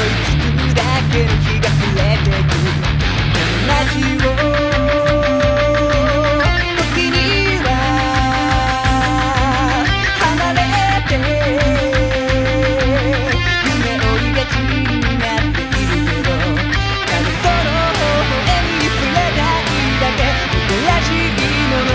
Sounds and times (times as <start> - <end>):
Electric guitar: 0.0 - 21.9.